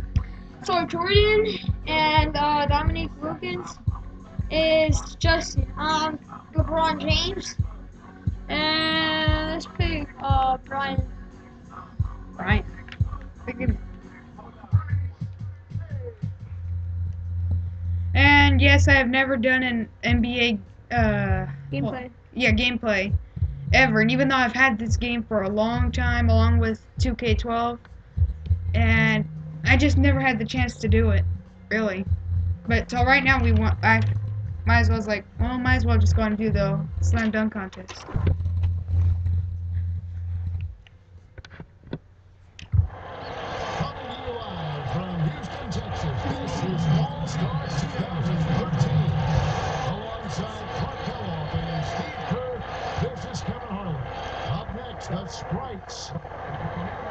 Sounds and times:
Speech: 0:00.6 - 0:03.8, 0:04.5 - 0:07.6, 0:08.5 - 0:11.1, 0:12.4 - 0:12.7, 0:13.5 - 0:13.8, 0:18.2 - 0:23.2, 0:23.8 - 0:27.8, 0:28.8 - 0:32.1, 0:32.7 - 0:38.0, 0:43.8 - 0:57.1.

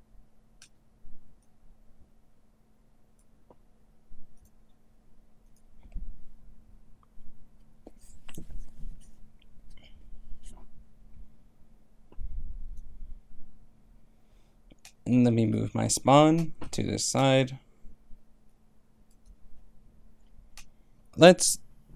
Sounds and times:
Silence: 0:00.0 - 0:15.1
Speech: 0:15.1 - 0:17.6, 0:21.2 - 0:21.6.

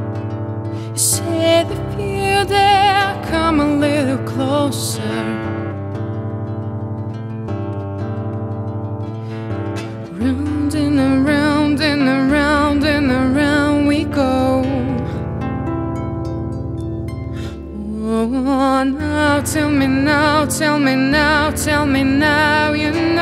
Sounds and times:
Vocal music: 0:00.0 - 0:06.4, 0:09.0 - 0:23.2.

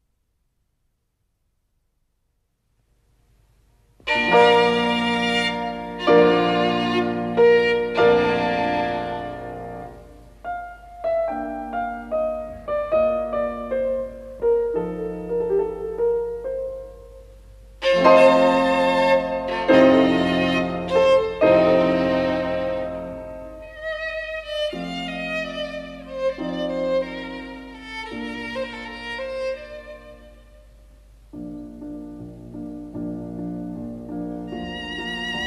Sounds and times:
Violin, fiddle: 0:04.1 - 0:10.0, 0:17.8 - 0:30.8, 0:34.4 - 0:35.4.

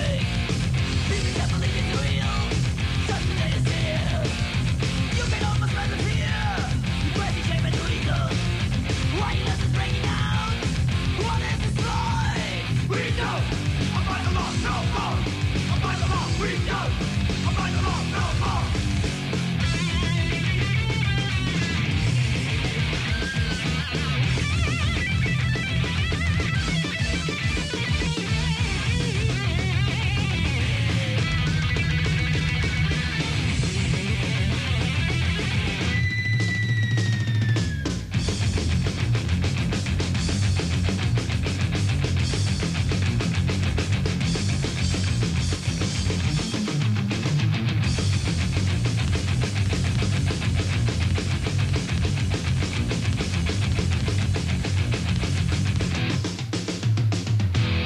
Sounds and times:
Heavy metal: 0:00.0 - 0:57.8.

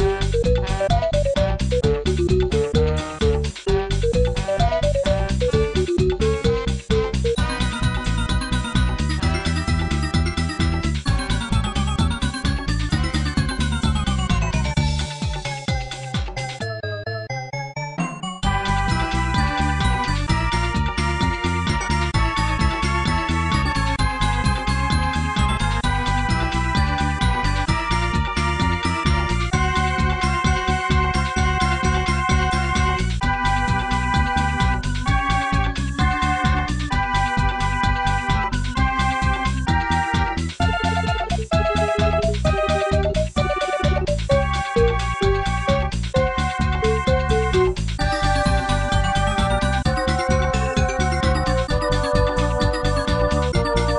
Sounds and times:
Video game music: 0:00.0 - 0:53.9.

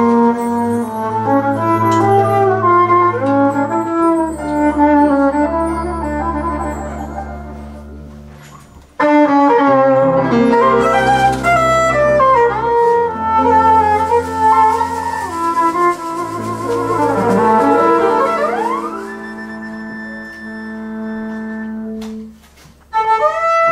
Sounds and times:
Violin, fiddle: 0:09.0 - 0:22.3.

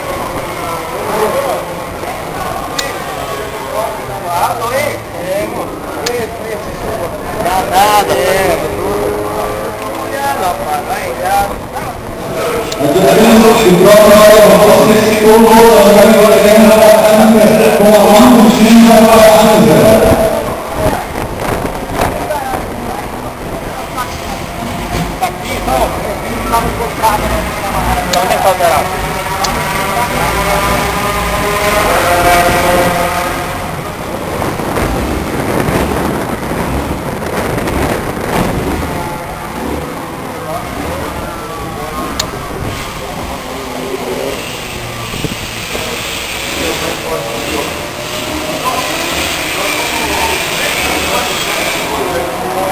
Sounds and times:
Speech: 0:00.0 - 0:21.2, 0:22.0 - 0:32.8, 0:45.8 - 0:52.7.

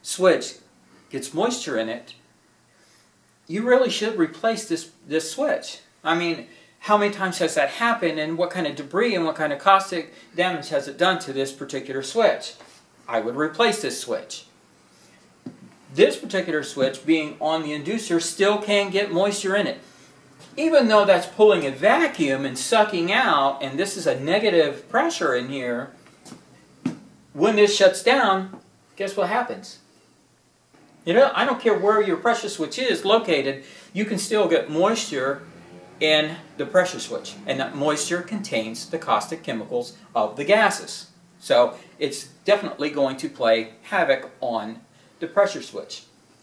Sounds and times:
Speech: 0:00.0 - 0:02.2, 0:03.5 - 0:14.5, 0:15.9 - 0:19.8, 0:20.6 - 0:26.0, 0:27.3 - 0:29.9, 0:31.0 - 0:35.4, 0:36.0 - 0:46.1.

